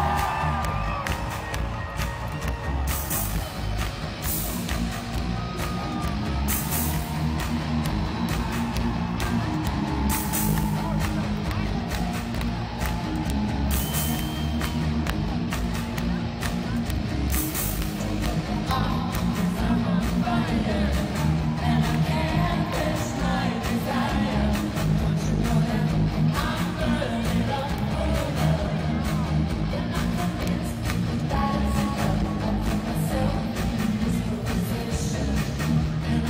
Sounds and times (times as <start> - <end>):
Music: 0.0 - 36.2.